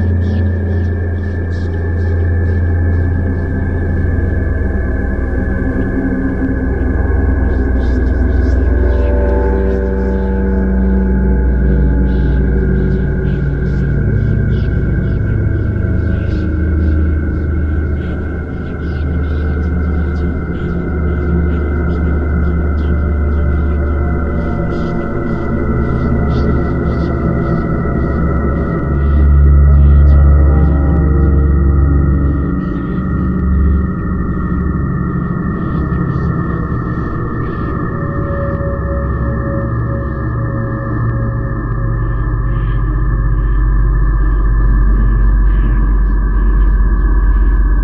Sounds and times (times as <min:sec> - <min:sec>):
Music: 0:00.0 - 0:47.8.